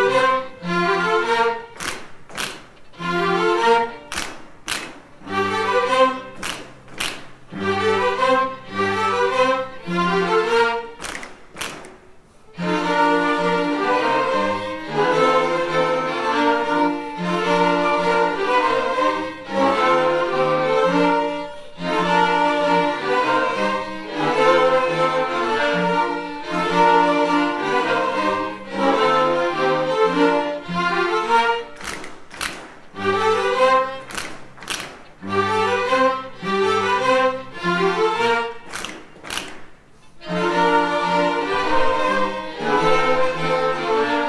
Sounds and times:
Violin, fiddle: 0.0 - 1.9, 2.9 - 4.3, 5.2 - 6.5, 7.4 - 11.0, 12.5 - 31.8, 32.9 - 34.4, 35.2 - 38.8, 40.1 - 44.2
Orchestra: 0.0 - 44.2.

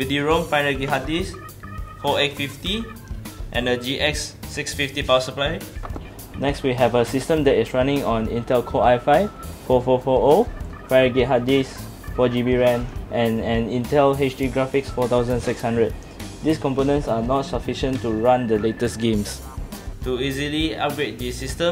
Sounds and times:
Speech: 0.0 - 1.4, 2.0 - 2.9, 3.6 - 5.6, 6.4 - 19.4, 20.0 - 21.7
Music: 0.0 - 21.7.

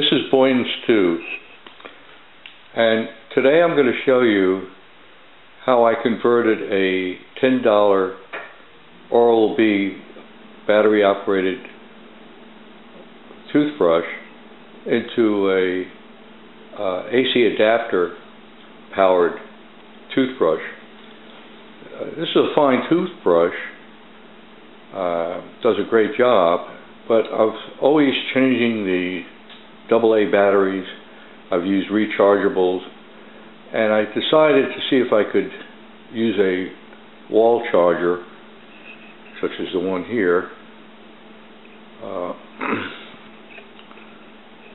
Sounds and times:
Speech: 0.0 - 1.6, 2.7 - 4.8, 5.6 - 8.3, 9.1 - 11.8, 13.4 - 16.0, 16.7 - 18.3, 18.9 - 19.5, 20.1 - 20.8, 21.8 - 23.8, 24.9 - 33.0, 33.7 - 38.4, 39.3 - 40.6, 42.0 - 43.1.

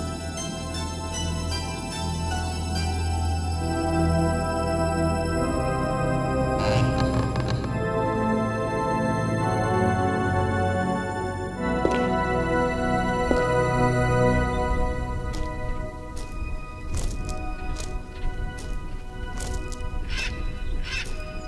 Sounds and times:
Music: 0.0 - 21.4.

